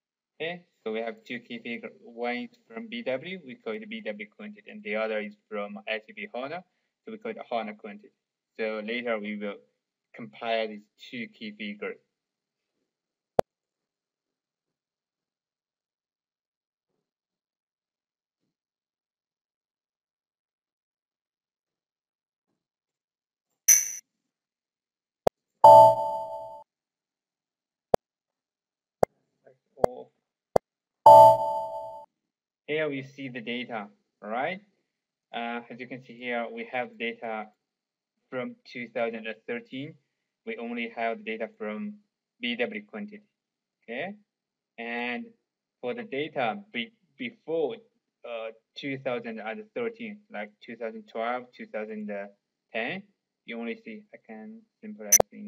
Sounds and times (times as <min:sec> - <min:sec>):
Speech: 0:00.4 - 0:09.6, 0:10.2 - 0:12.0, 0:29.5 - 0:30.1, 0:32.7 - 0:34.7, 0:35.3 - 0:37.5, 0:38.3 - 0:43.2, 0:43.8 - 0:44.2, 0:44.8 - 0:55.4.